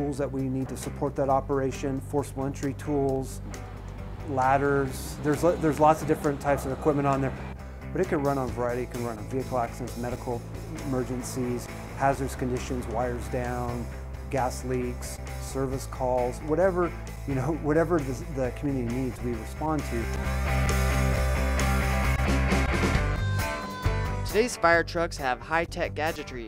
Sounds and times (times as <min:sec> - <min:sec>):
Speech: 0:00.0 - 0:03.4, 0:04.3 - 0:07.4, 0:08.0 - 0:20.1, 0:24.3 - 0:26.4
Music: 0:00.0 - 0:26.4.